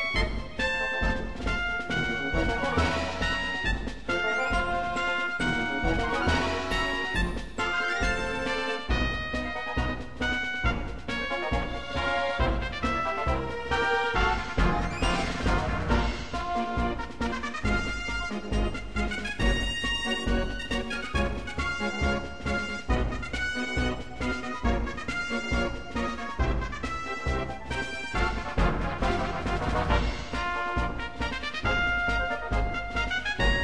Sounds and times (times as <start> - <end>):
Music: 0.0 - 33.6.